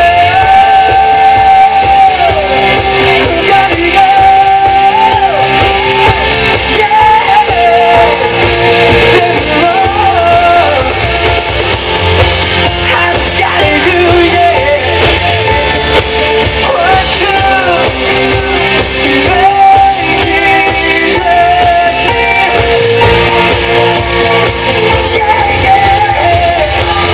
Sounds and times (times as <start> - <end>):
Singing: 0.0 - 11.7, 16.6 - 23.1, 24.3 - 27.1
Music: 0.0 - 27.1.